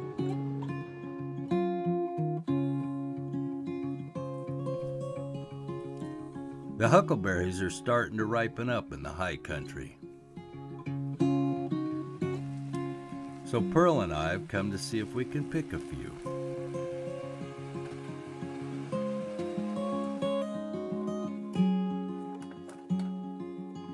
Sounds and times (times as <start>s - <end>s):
Music: 0.0s - 23.9s
Speech: 6.8s - 10.0s, 13.5s - 16.2s.